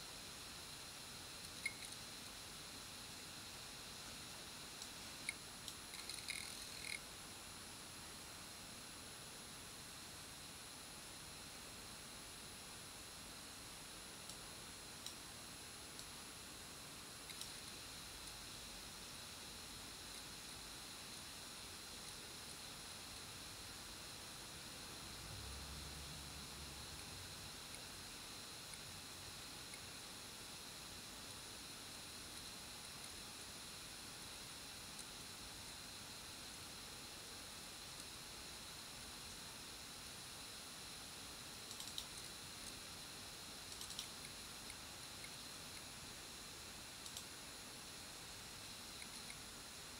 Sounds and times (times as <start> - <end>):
Inside, small room: 0.0 - 49.9.